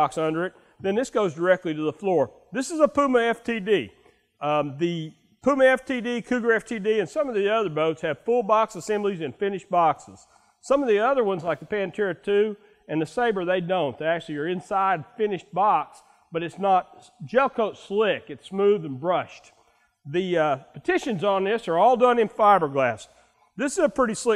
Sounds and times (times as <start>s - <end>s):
Speech: 0.0s - 24.3s.